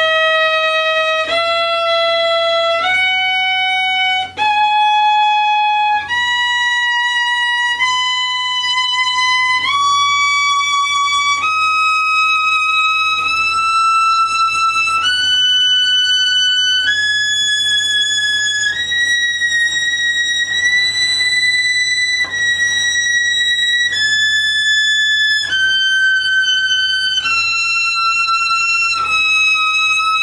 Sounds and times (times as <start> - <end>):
Violin, fiddle: 0.0 - 30.2.